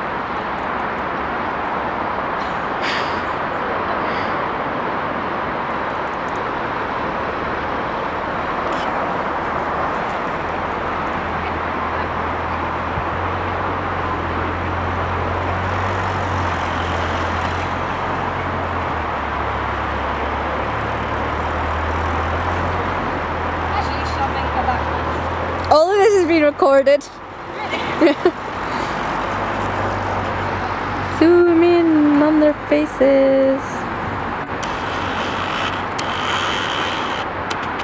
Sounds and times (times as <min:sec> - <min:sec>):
Speech: 0:23.7 - 0:27.8, 0:31.1 - 0:33.8.